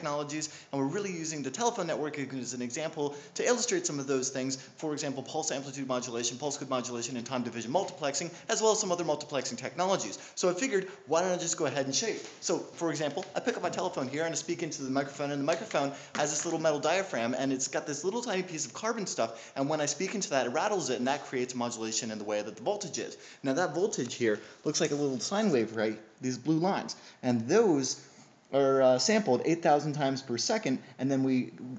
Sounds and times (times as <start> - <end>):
Speech: 0.0 - 31.7.